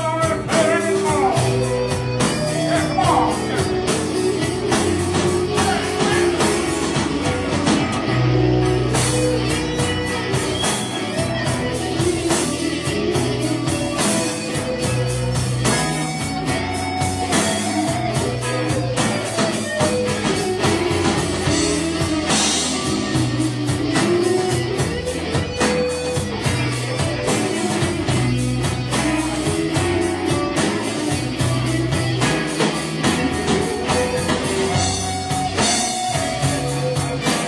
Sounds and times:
Blues: 0.0s - 37.4s
Drum: 0.0s - 37.4s
Guitar: 0.0s - 37.4s
Rock music: 0.0s - 37.4s
Music of Latin America: 8.7s - 13.2s.

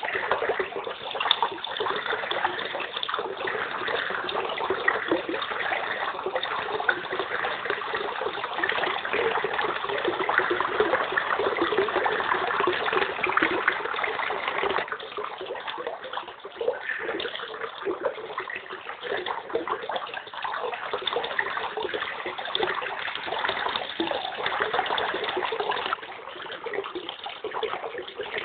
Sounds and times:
Slosh: 0.0s - 28.4s.

